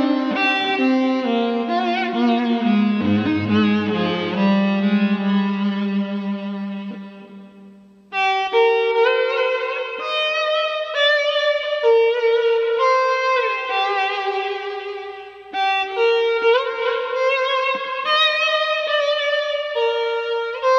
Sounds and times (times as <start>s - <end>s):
Violin, fiddle: 0.0s - 6.4s, 8.2s - 20.7s.